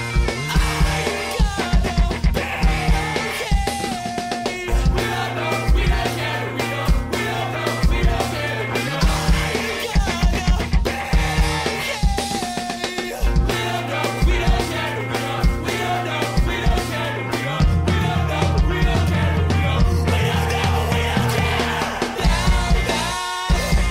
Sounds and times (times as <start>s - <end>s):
Music: 0.0s - 23.9s.